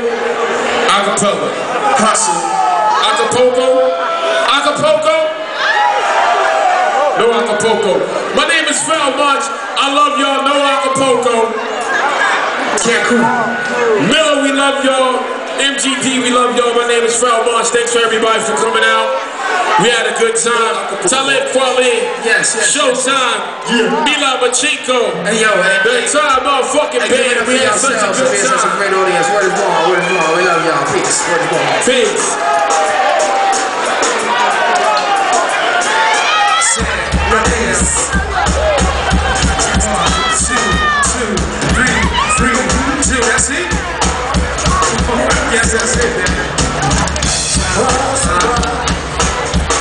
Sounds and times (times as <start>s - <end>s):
Speech: 19.8s - 32.4s
Music: 27.4s - 49.8s.